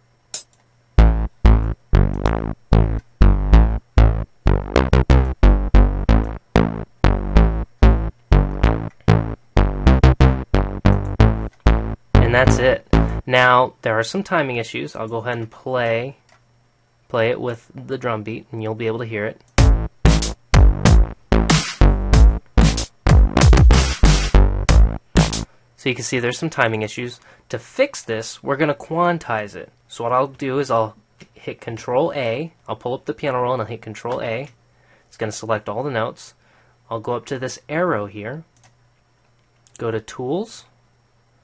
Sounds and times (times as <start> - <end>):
Inside, small room: 0.0 - 41.4
Music: 0.4 - 13.3, 19.6 - 25.5
Speech: 12.2 - 16.2, 17.1 - 19.4, 25.8 - 38.5, 39.8 - 40.8.